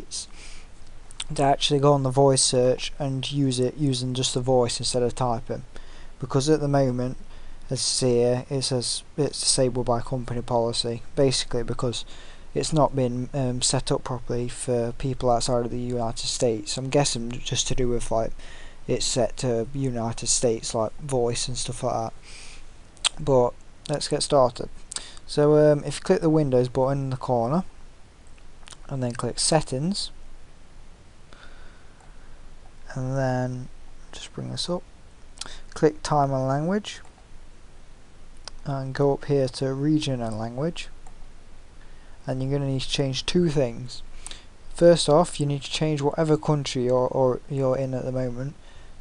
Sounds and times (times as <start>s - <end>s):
Speech: 0.0s - 0.4s, 1.2s - 22.2s, 23.1s - 24.7s, 25.3s - 27.7s, 28.7s - 30.2s, 32.9s - 37.0s, 38.5s - 41.0s, 42.2s - 44.1s, 44.7s - 48.6s.